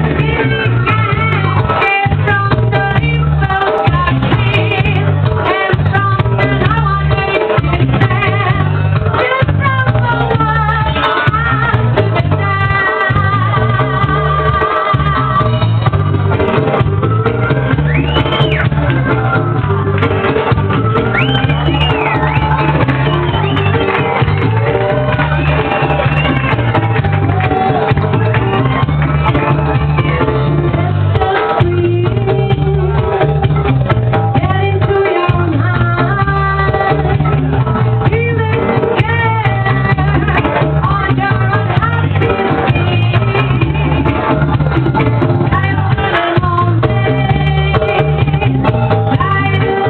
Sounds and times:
Music: 0.0 - 49.9.

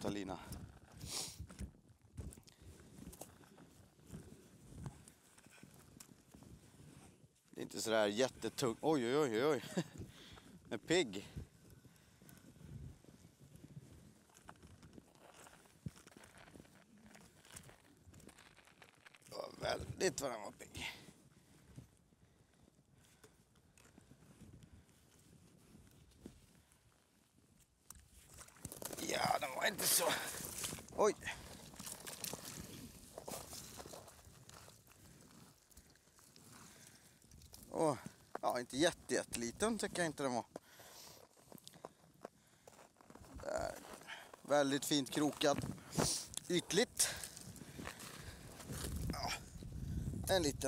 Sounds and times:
Speech: 0.0 - 0.5, 7.6 - 9.8, 10.7 - 11.4, 19.3 - 21.0, 29.0 - 30.4, 31.0 - 31.3, 37.7 - 40.5, 43.4 - 43.8, 44.5 - 47.2, 50.3 - 50.6
Outside, rural or natural: 0.0 - 50.6.

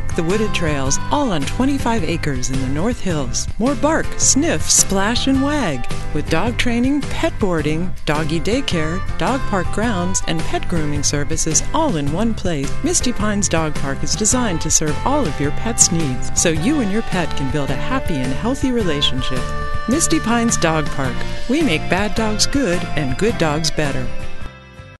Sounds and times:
Music: 0.0 - 25.0
Speech: 0.2 - 24.1.

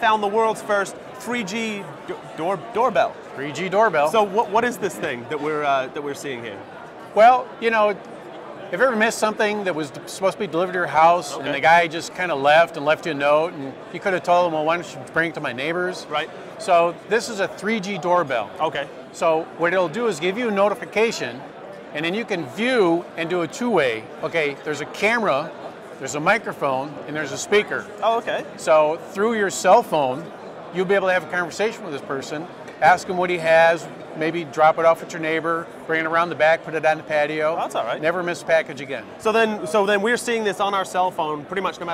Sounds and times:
Speech: 0.0 - 8.0, 8.7 - 41.9.

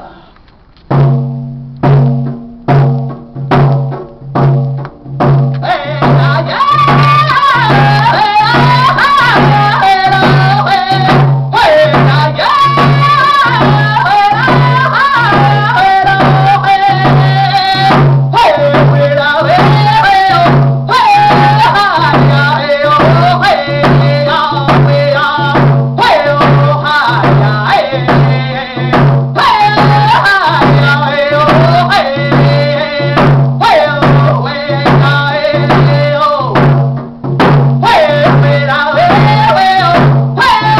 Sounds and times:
Music: 0.6 - 40.7.

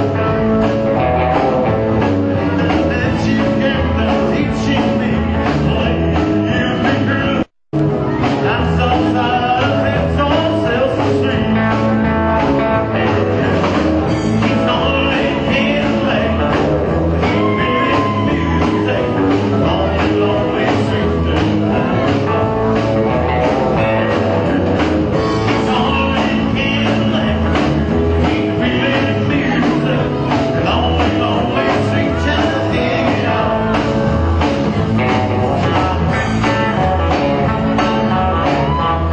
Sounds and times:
Acoustic guitar: 0.0 - 39.1.

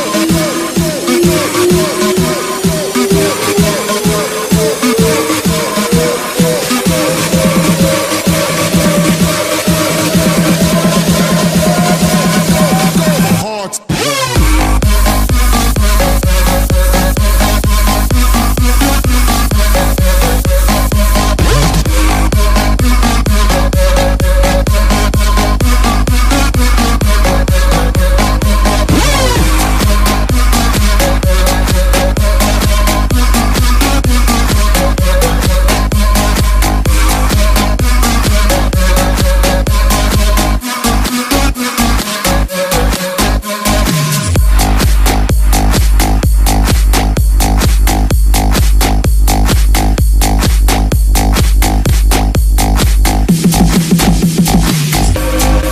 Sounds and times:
Music: 0.0 - 55.7.

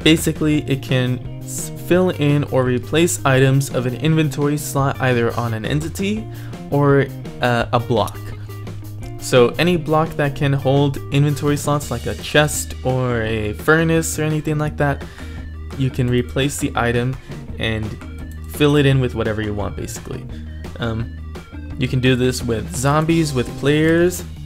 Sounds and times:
Speech: 0.0 - 8.3, 9.2 - 15.0, 15.8 - 21.1, 21.8 - 24.4
Music: 0.0 - 24.4.

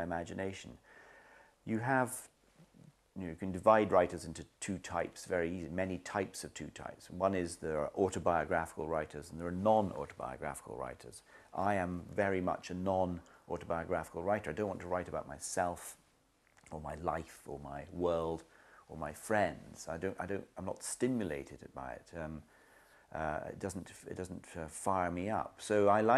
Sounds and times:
Speech: 0.0 - 0.8, 1.6 - 16.0, 16.6 - 22.5, 23.1 - 26.1.

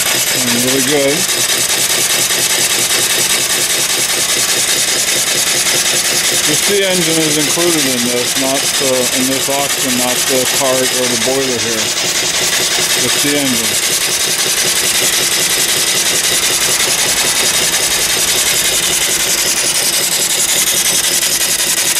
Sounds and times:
Steam: 0.0 - 21.9.

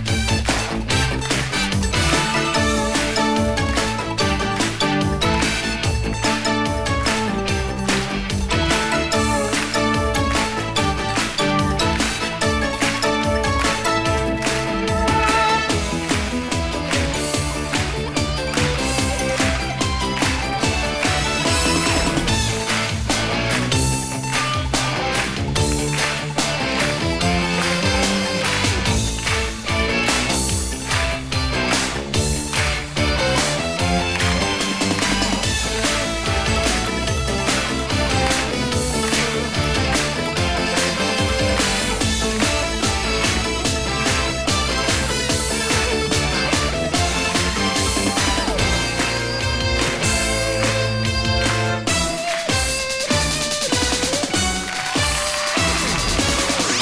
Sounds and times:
Music: 0.0 - 56.8.

